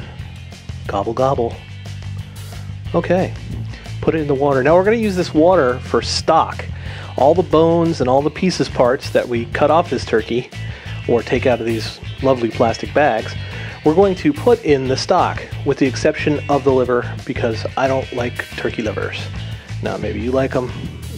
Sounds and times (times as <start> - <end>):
Music: 0.0 - 21.1
Speech: 0.9 - 1.6, 2.9 - 3.4, 4.0 - 20.8.